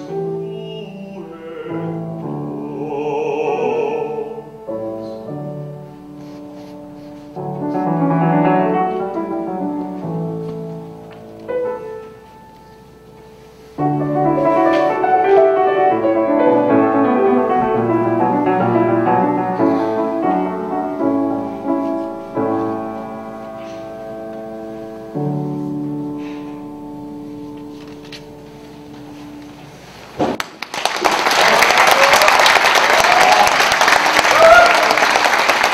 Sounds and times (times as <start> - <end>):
Music: 0.0 - 30.2
Inside, large room or hall: 0.0 - 35.7.